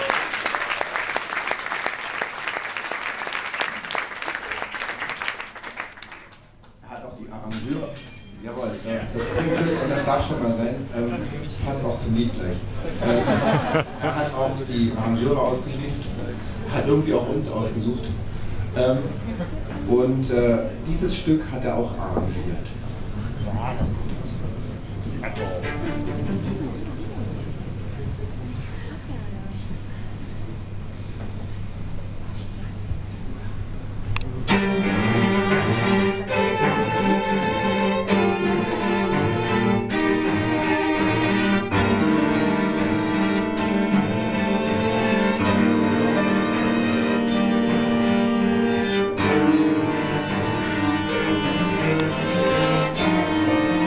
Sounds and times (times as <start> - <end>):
Speech: 6.8 - 13.2, 14.0 - 18.2, 19.8 - 25.8.